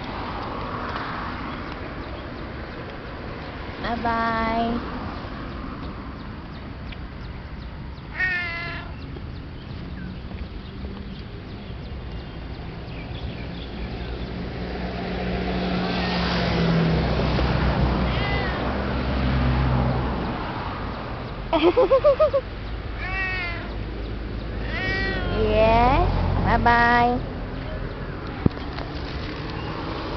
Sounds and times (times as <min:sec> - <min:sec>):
Meow: 0:08.1 - 0:09.0, 0:18.0 - 0:18.8, 0:23.0 - 0:23.8, 0:24.6 - 0:25.5.